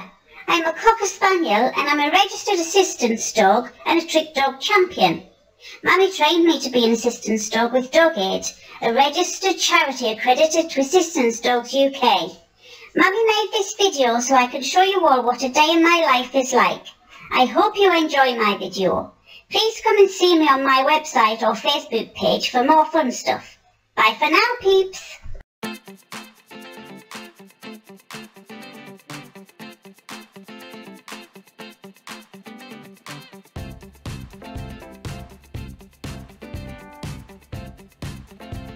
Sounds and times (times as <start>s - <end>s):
Speech: 0.0s - 25.4s
Music: 25.6s - 38.7s.